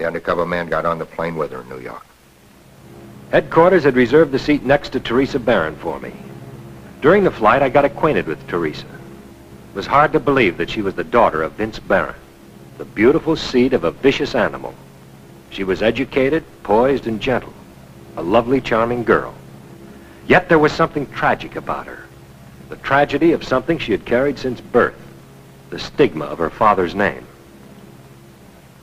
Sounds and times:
Speech: 0.0 - 2.1, 3.3 - 6.3, 7.0 - 9.0, 9.8 - 12.2, 12.8 - 14.8, 15.5 - 17.6, 18.2 - 19.4, 20.3 - 22.1, 22.7 - 25.1, 25.7 - 27.4.

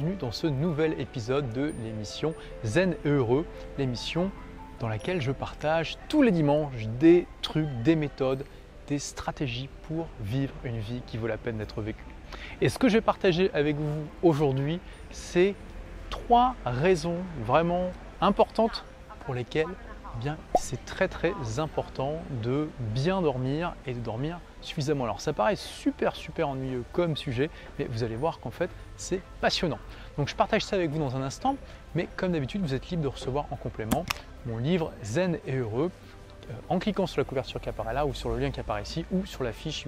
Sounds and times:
Speech: 0.0 - 12.0, 12.6 - 15.6, 16.2 - 35.9, 36.5 - 39.8
Music: 0.0 - 39.8.

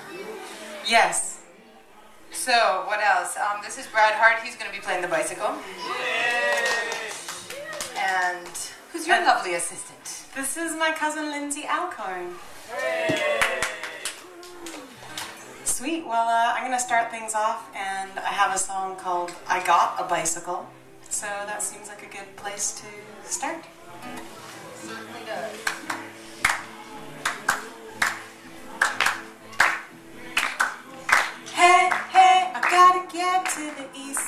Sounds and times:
Music: 0.0 - 34.2.

